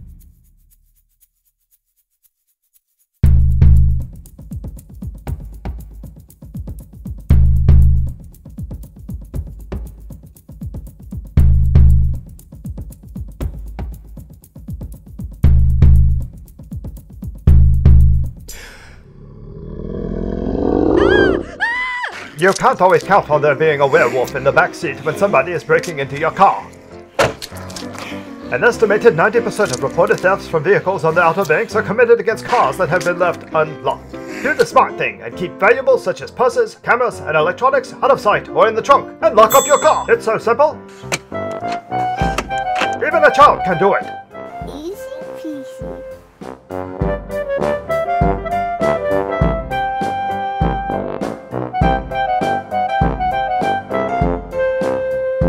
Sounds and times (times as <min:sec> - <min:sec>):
Music: 0:00.0 - 0:01.9, 0:03.2 - 0:18.5, 0:22.2 - 0:55.4
Speech: 0:22.4 - 0:26.7, 0:28.5 - 0:40.8, 0:43.0 - 0:45.9.